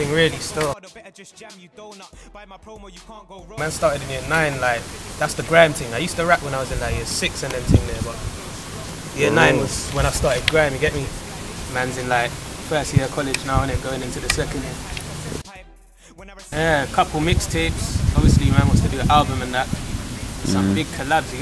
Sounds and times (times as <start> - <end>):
Speech: 0.0 - 0.8, 3.6 - 15.5, 16.5 - 21.4
Music: 0.0 - 21.4.